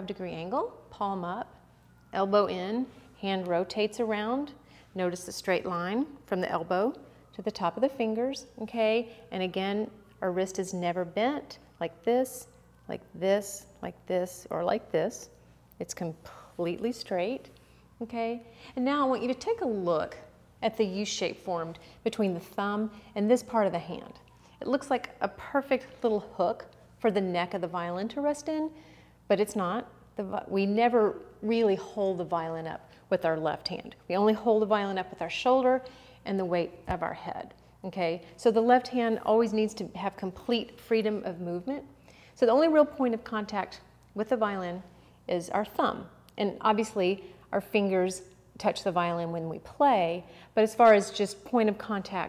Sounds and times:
Speech: 0:02.2 - 0:28.7, 0:29.3 - 0:52.2.

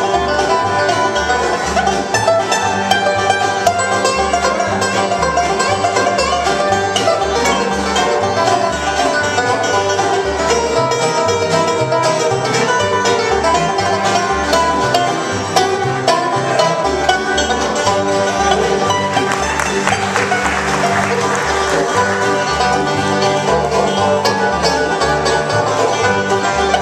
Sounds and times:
Banjo: 0:00.0 - 0:26.8
Bluegrass: 0:00.0 - 0:26.8
Violin, fiddle: 0:00.0 - 0:26.8.

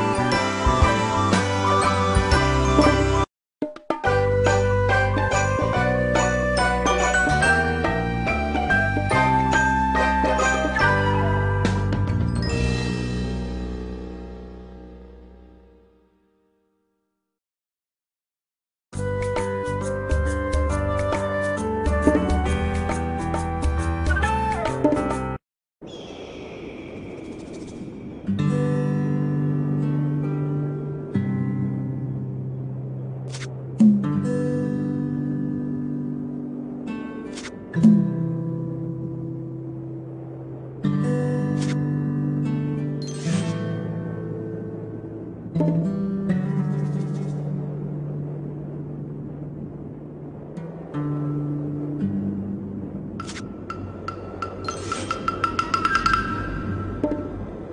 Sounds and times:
Music: 0:00.0 - 0:17.0, 0:18.9 - 0:25.4, 0:28.3 - 0:48.5, 0:50.6 - 0:57.7.

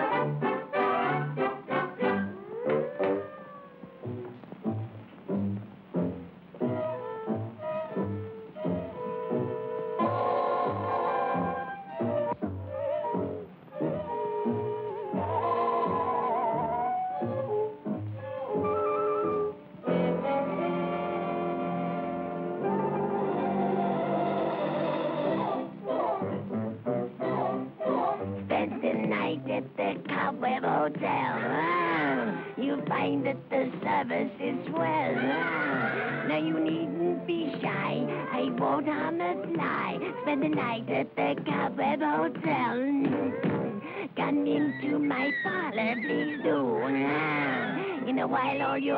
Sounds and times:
Music: 0:00.0 - 0:48.9.

